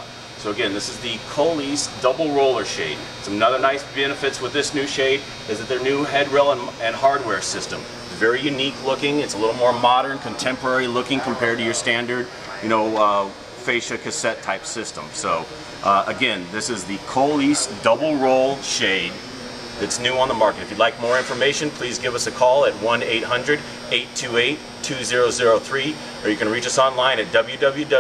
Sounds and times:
Speech: 0:00.0 - 0:19.2, 0:19.8 - 0:28.0.

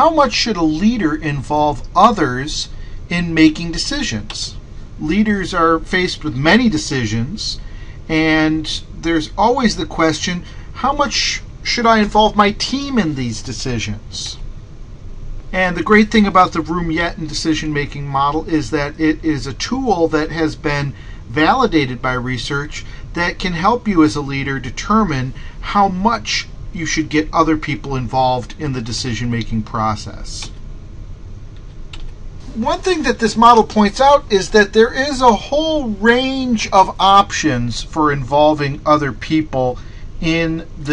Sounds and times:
Speech: 0:00.0 - 0:14.4, 0:15.5 - 0:30.6, 0:32.5 - 0:40.9.

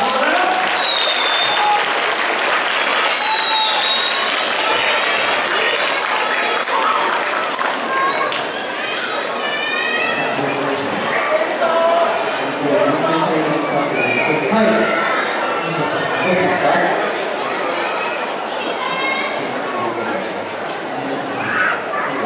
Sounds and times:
Speech: 0:00.0 - 0:00.8, 0:09.6 - 0:17.2.

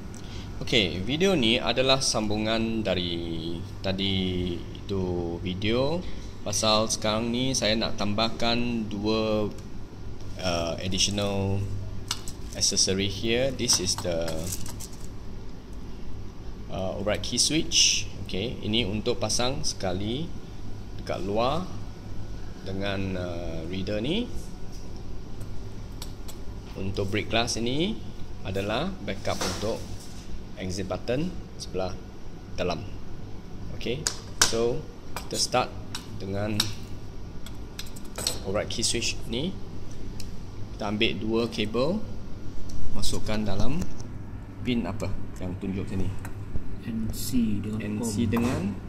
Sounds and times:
Speech: 0:00.6 - 0:09.6, 0:10.4 - 0:11.8, 0:12.6 - 0:14.6, 0:16.7 - 0:20.4, 0:21.0 - 0:21.8, 0:22.6 - 0:24.4, 0:26.7 - 0:29.9, 0:30.6 - 0:32.0, 0:32.6 - 0:33.0, 0:33.7 - 0:36.8, 0:38.2 - 0:39.6, 0:40.8 - 0:42.1, 0:43.0 - 0:44.0, 0:44.6 - 0:46.2, 0:46.8 - 0:48.8.

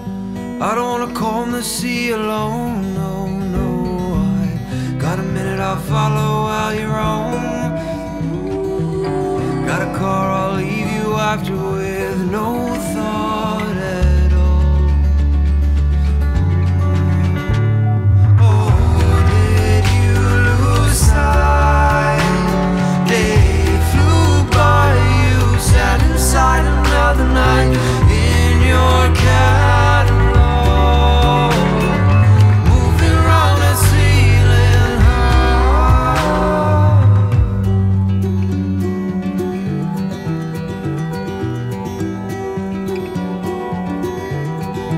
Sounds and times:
Rhythm and blues: 0:03.8 - 0:44.9.

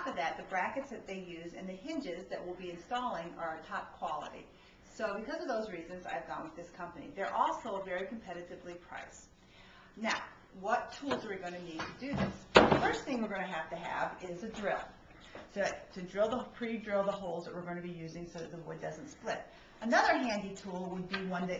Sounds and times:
Speech: 0:00.0 - 0:09.3, 0:10.0 - 0:21.5.

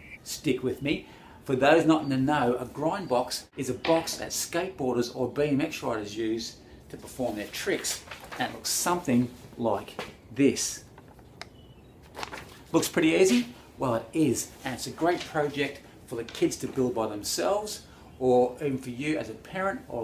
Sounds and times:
Speech: 0:00.2 - 0:10.9, 0:12.7 - 0:20.0.

